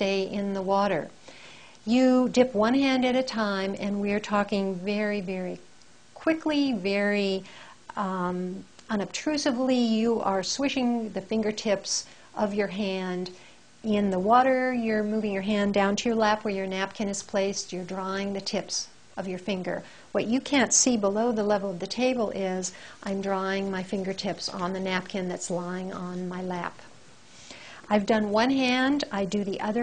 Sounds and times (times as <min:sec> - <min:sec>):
Speech: 0:00.0 - 0:01.1, 0:01.9 - 0:05.6, 0:06.2 - 0:26.9, 0:27.9 - 0:29.8
Inside, small room: 0:00.0 - 0:29.8.